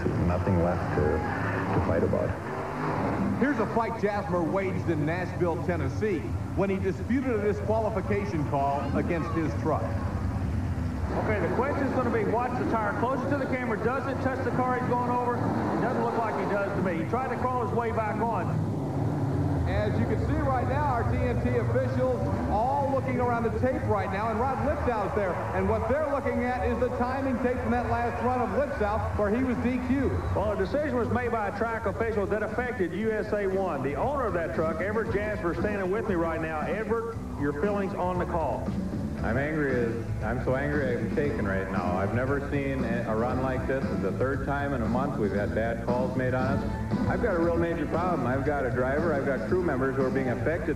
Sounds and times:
Speech: 0:00.0 - 0:02.4, 0:03.4 - 0:10.0, 0:11.1 - 0:18.5, 0:19.7 - 0:50.7
Music: 0:00.0 - 0:50.7.

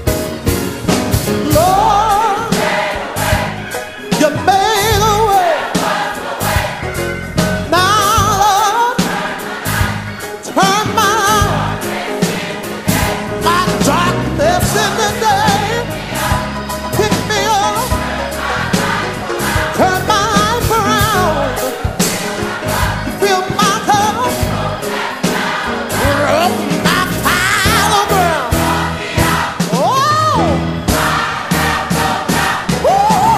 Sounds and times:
Music: 0:00.0 - 0:33.3.

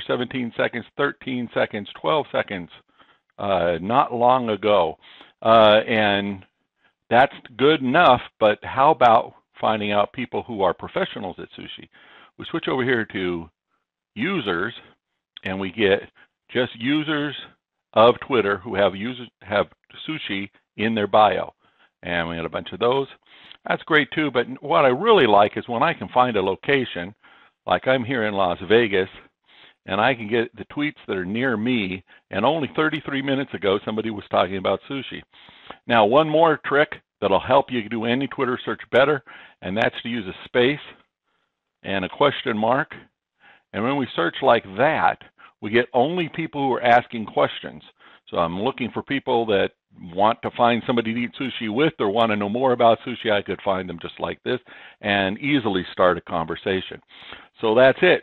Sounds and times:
Speech: 0:00.0 - 0:02.8, 0:03.4 - 0:06.4, 0:07.1 - 0:13.5, 0:14.2 - 0:41.0, 0:41.8 - 0:43.1, 0:43.7 - 0:58.2.

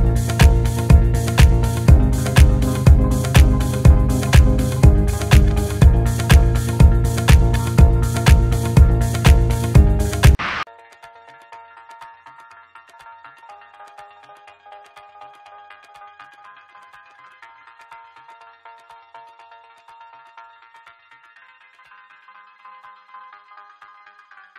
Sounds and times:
Electronica: 0:00.0 - 0:24.5.

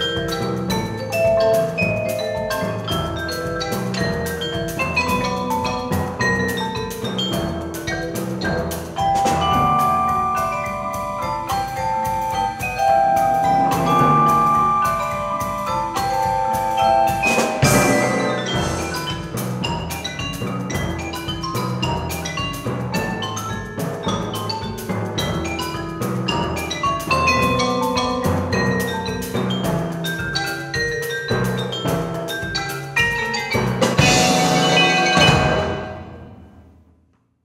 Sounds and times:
Vibraphone: 0:00.0 - 0:36.6.

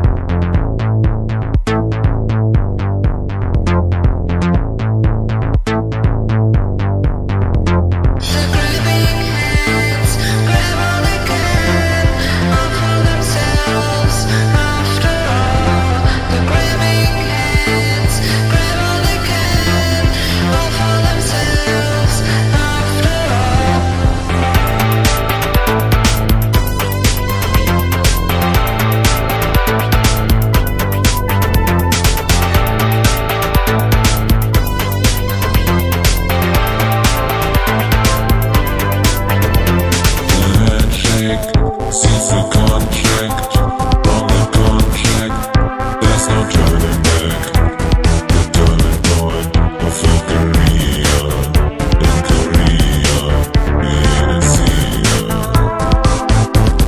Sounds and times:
Drum machine: 0:00.0 - 0:15.7, 0:16.6 - 0:56.8.

